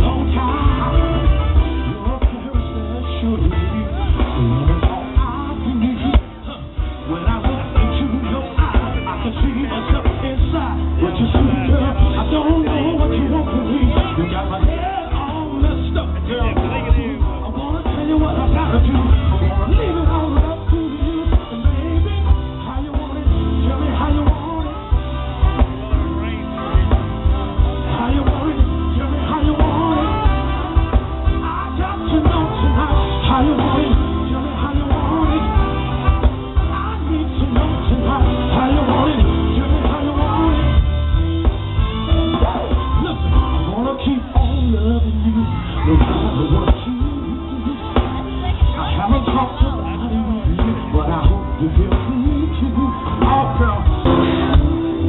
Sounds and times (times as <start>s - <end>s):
Music: 0.0s - 55.0s
Singing: 0.0s - 55.0s
Speech: 7.9s - 20.3s, 25.4s - 30.1s, 43.0s - 55.0s.